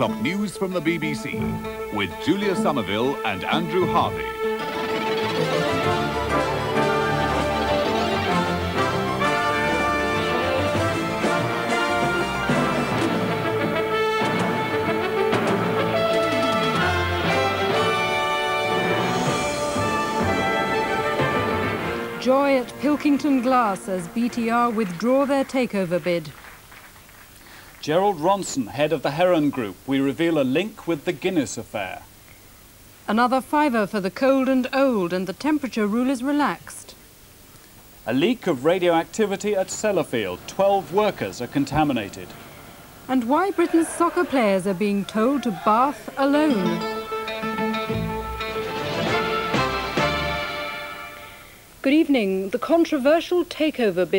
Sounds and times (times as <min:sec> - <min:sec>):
Speech: 0:00.0 - 0:04.2, 0:22.2 - 0:26.3, 0:27.8 - 0:32.1, 0:33.1 - 0:37.0, 0:38.1 - 0:42.3, 0:43.1 - 0:46.8, 0:51.8 - 0:54.1
Music: 0:00.0 - 0:26.3, 0:39.0 - 0:42.8, 0:45.9 - 0:52.5.